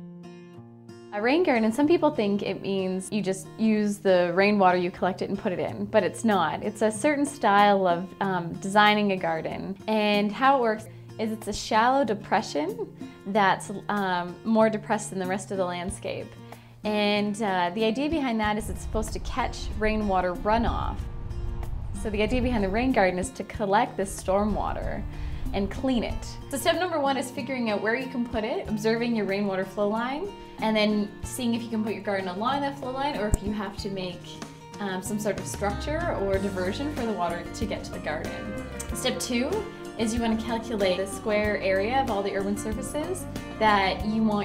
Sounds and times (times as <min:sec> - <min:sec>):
Music: 0:00.0 - 0:44.4
Speech: 0:01.2 - 0:16.3, 0:16.9 - 0:21.0, 0:22.0 - 0:25.0, 0:25.6 - 0:44.4.